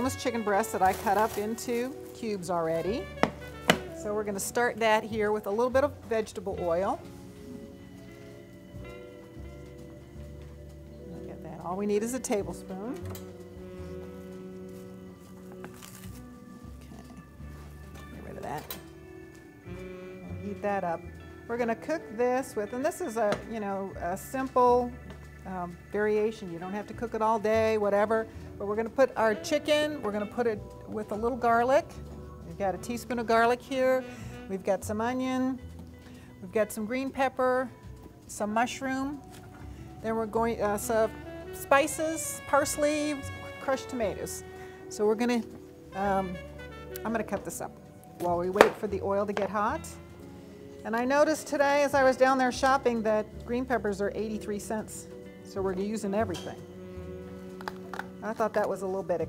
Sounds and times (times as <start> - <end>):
Music: 0.0 - 59.2.